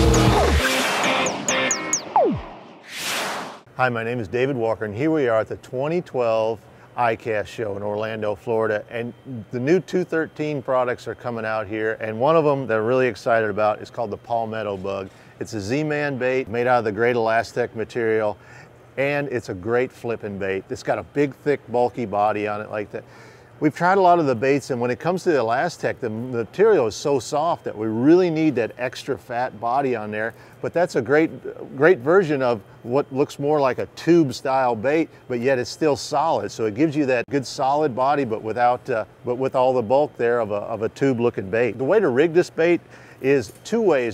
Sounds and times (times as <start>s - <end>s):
Music: 0.0s - 2.6s
Speech: 3.8s - 18.4s, 19.0s - 23.0s, 23.6s - 44.1s.